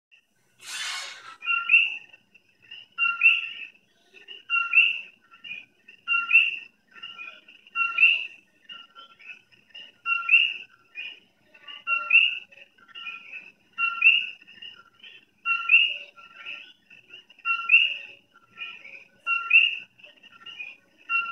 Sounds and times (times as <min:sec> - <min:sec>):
Television: 0:00.1 - 0:21.3
Music: 0:01.4 - 0:21.3.